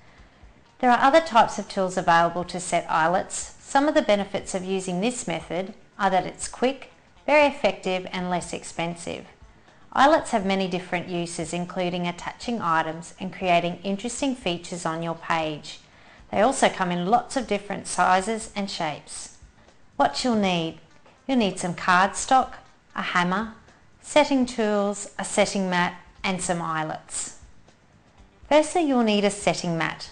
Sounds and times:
Speech: 0.8s - 9.4s, 10.0s - 19.4s, 20.0s - 27.4s, 28.5s - 30.1s.

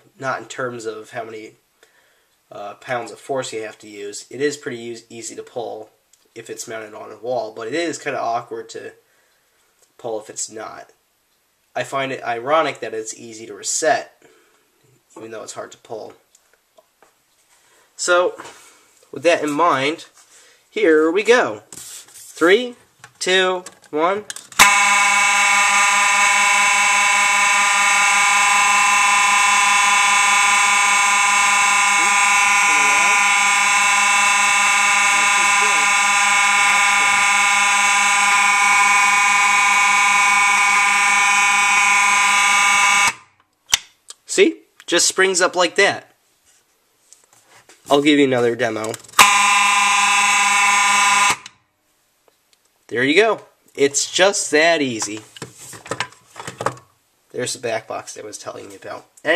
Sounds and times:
Speech: 0.1s - 1.6s, 2.5s - 9.0s, 10.0s - 11.0s, 11.8s - 14.2s, 15.1s - 16.2s, 18.0s - 18.5s, 19.1s - 21.7s, 22.4s - 24.3s, 32.0s - 33.2s, 35.1s - 36.0s, 44.1s - 46.2s, 47.9s - 49.0s, 52.9s - 55.3s, 57.3s - 59.3s
Fire alarm: 24.6s - 43.3s, 49.2s - 51.6s.

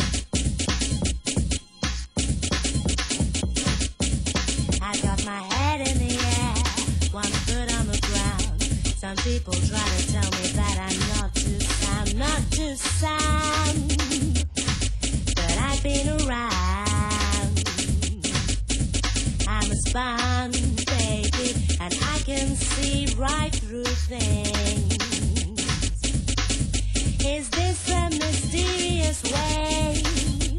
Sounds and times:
Music: 0.0s - 30.5s.

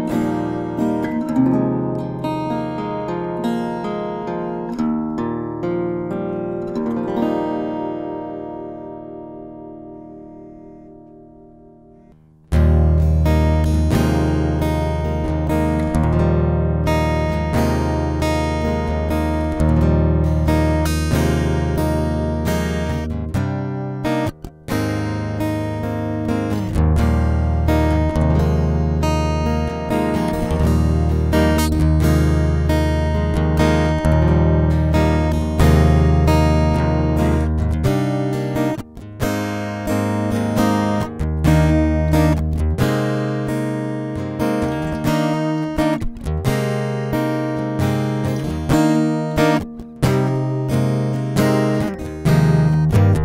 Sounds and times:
Acoustic guitar: 0.0s - 53.2s.

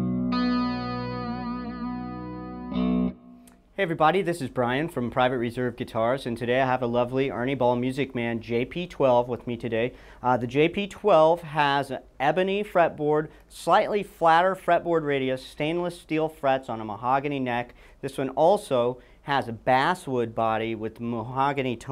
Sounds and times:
Music: 0.0s - 3.6s
Distortion: 0.0s - 21.9s
Speech: 3.8s - 21.9s.

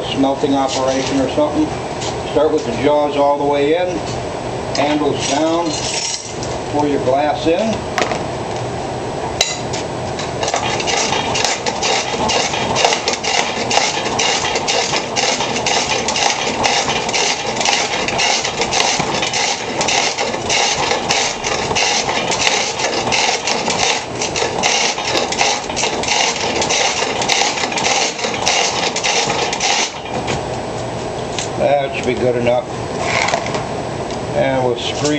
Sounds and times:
Speech: 0.0s - 1.7s, 2.3s - 4.0s, 4.8s - 5.8s, 6.7s - 7.8s, 31.6s - 32.7s, 34.4s - 35.1s.

